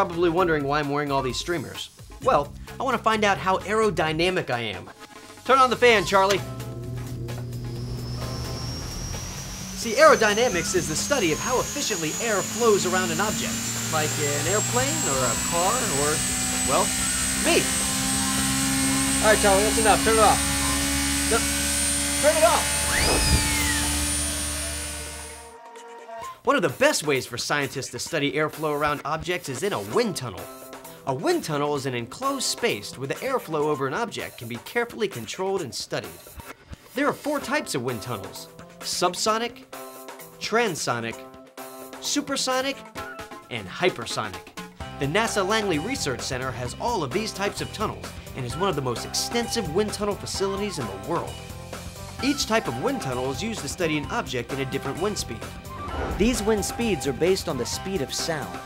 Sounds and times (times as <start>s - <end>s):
Speech: 0.0s - 4.9s, 5.5s - 6.4s, 9.8s - 17.7s, 19.2s - 20.4s, 22.2s - 22.7s, 26.4s - 30.5s, 31.1s - 36.2s, 37.0s - 39.6s, 40.4s - 41.2s, 42.0s - 42.8s, 43.5s - 44.4s, 45.0s - 51.4s, 52.2s - 55.5s, 56.2s - 58.6s.